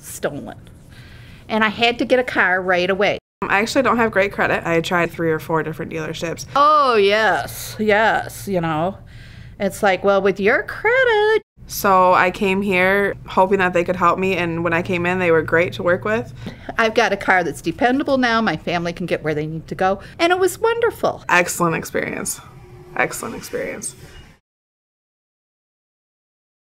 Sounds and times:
Speech: 1.5s - 9.0s, 9.6s - 22.4s, 23.0s - 24.0s.

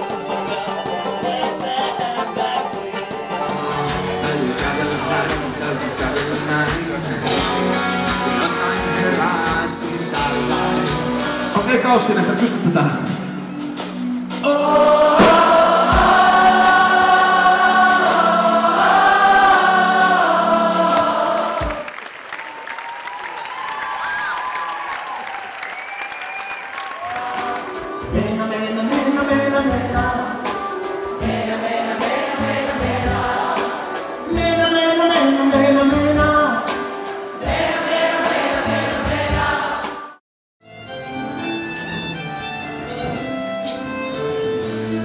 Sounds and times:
Soul music: 0.0s - 22.0s, 25.7s - 45.0s.

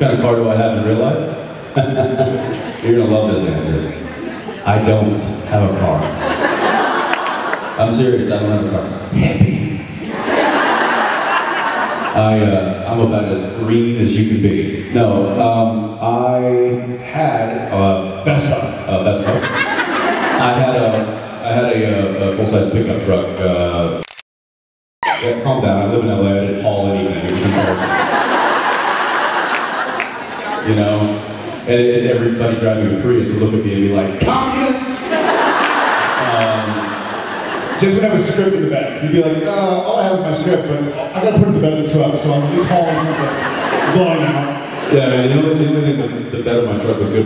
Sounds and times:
Speech: 0.0s - 4.0s, 4.6s - 6.2s, 7.8s - 9.8s, 12.1s - 19.6s, 20.4s - 24.0s, 25.2s - 27.9s, 30.4s - 35.0s, 36.2s - 36.9s, 37.8s - 47.2s.

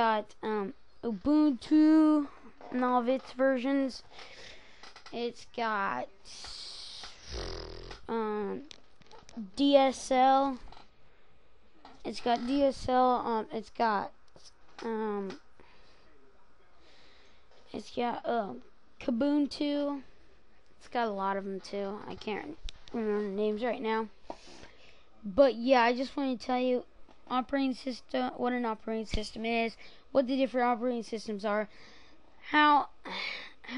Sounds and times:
Speech: 0.0s - 4.0s, 5.1s - 7.1s, 8.1s - 8.7s, 9.4s - 10.6s, 12.1s - 14.1s, 14.8s - 15.4s, 17.7s - 20.1s, 20.8s - 24.1s, 25.2s - 31.7s, 32.4s - 33.7s
Inside, small room: 0.0s - 33.7s.

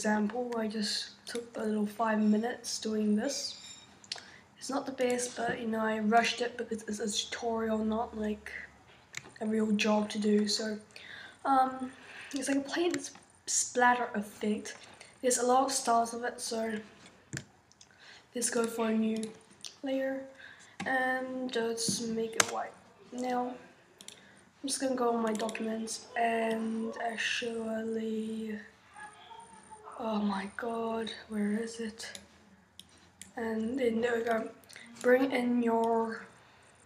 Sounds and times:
Speech: 0.0s - 3.6s, 4.6s - 8.7s, 9.4s - 17.0s, 18.4s - 23.7s, 24.6s - 32.3s, 33.4s - 36.4s.

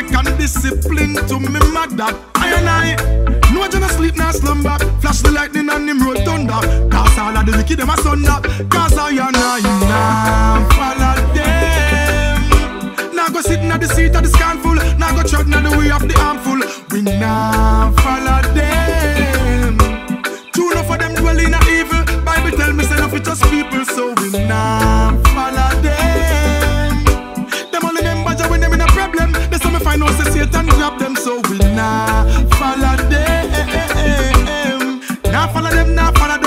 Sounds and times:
Music of Africa: 0.0s - 36.4s
Reggae: 0.0s - 36.4s.

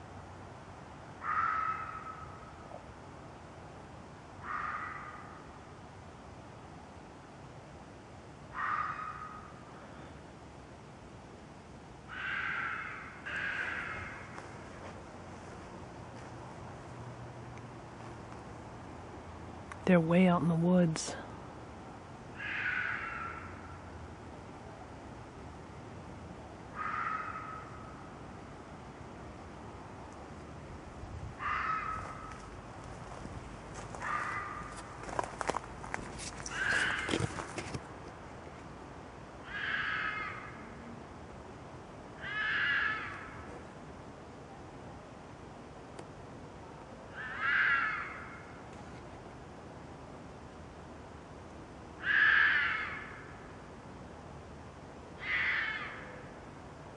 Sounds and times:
Rustle: 0.0s - 56.9s.

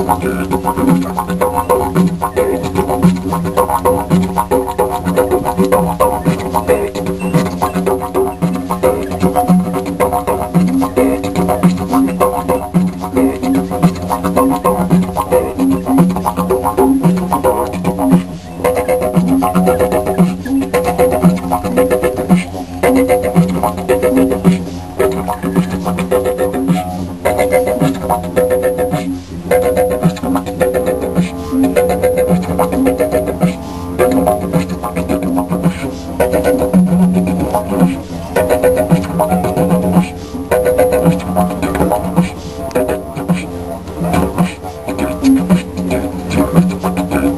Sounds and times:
Didgeridoo: 0.0s - 47.3s.

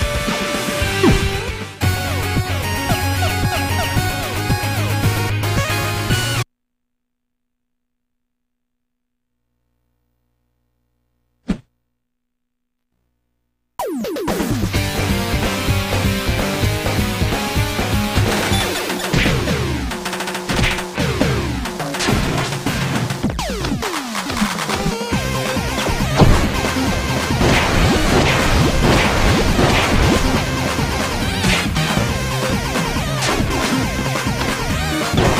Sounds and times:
Music: 0.0s - 6.5s, 13.8s - 35.3s.

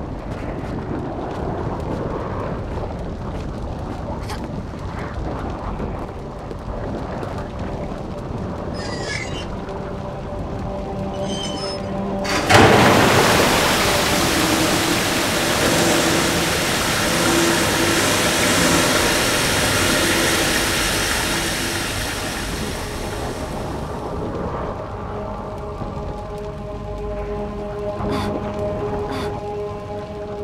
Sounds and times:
Stream: 11.1s - 24.2s.

